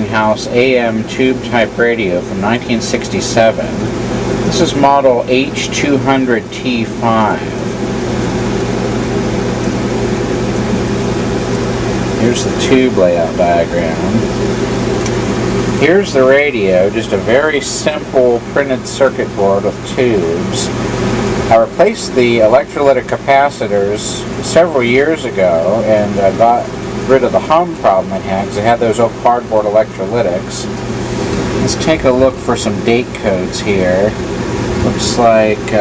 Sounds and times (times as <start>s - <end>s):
Speech: 0.0s - 3.8s, 4.5s - 7.6s, 12.2s - 14.3s, 15.8s - 20.8s, 21.5s - 30.7s, 31.6s - 34.2s, 34.8s - 35.8s.